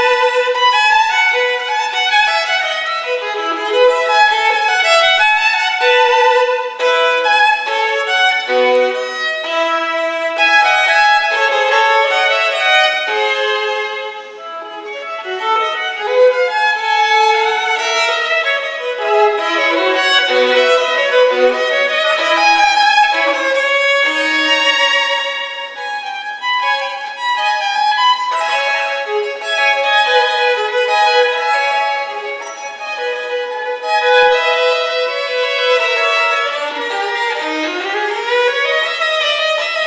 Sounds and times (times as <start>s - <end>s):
Violin, fiddle: 0.0s - 39.8s.